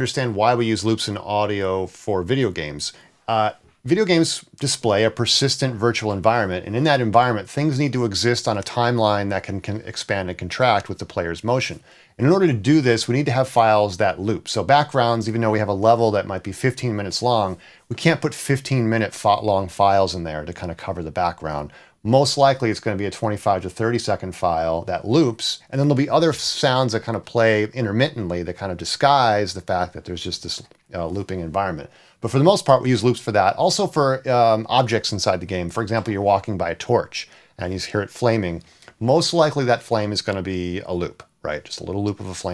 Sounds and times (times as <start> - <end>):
Speech: 0.0 - 42.5.